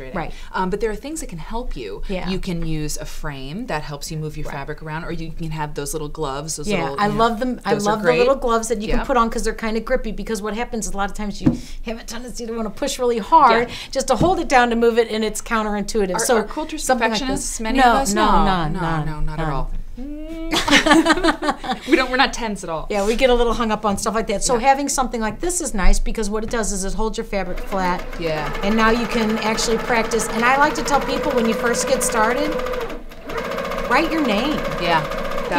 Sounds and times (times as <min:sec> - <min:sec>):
Sewing machine: 0:27.5 - 0:35.5.